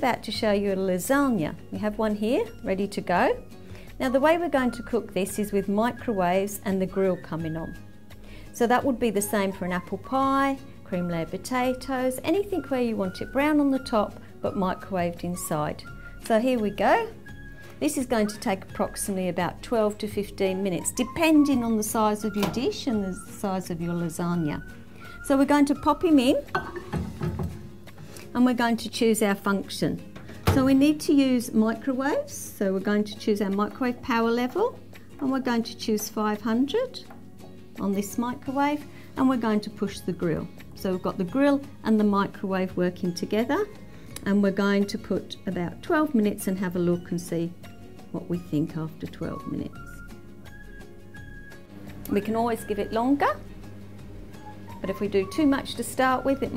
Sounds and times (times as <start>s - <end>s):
Speech: 0.0s - 3.4s, 4.0s - 7.8s, 8.6s - 17.2s, 17.8s - 24.6s, 25.2s - 26.5s, 28.3s - 37.1s, 37.8s - 47.5s, 48.1s - 49.8s, 52.1s - 53.4s, 54.8s - 56.5s
Music: 0.0s - 56.5s.